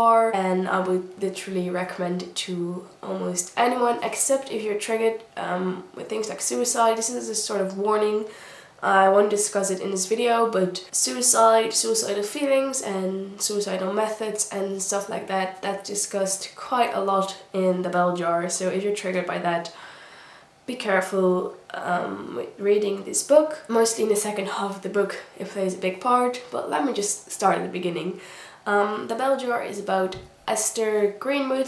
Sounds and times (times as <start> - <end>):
Speech: 0.0 - 19.8, 20.7 - 31.6.